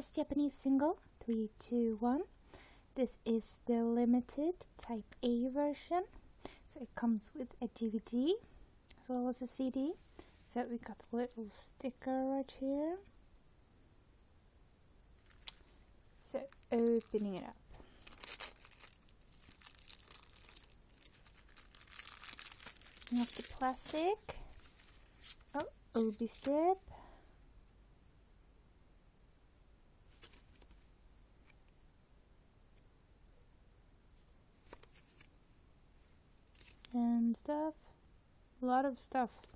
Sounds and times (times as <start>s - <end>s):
Speech: 0.0s - 2.3s, 3.0s - 6.1s, 6.7s - 8.4s, 9.0s - 13.1s, 16.2s - 17.6s, 23.1s - 24.4s, 25.6s - 26.9s, 36.9s - 38.0s, 38.6s - 39.5s
Inside, small room: 0.0s - 39.5s
Crumpling, crinkling: 15.2s - 26.6s, 30.1s - 30.8s, 34.6s - 35.3s, 36.5s - 37.0s.